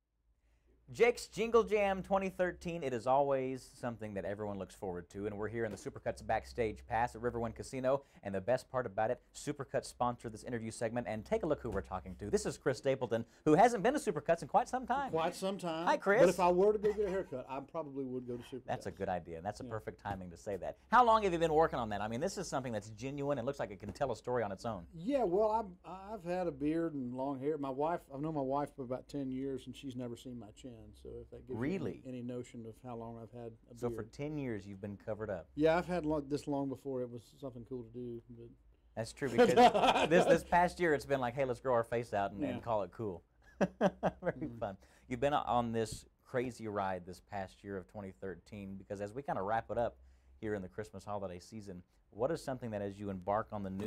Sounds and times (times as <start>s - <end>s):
Speech: 0.9s - 43.2s, 44.3s - 53.8s.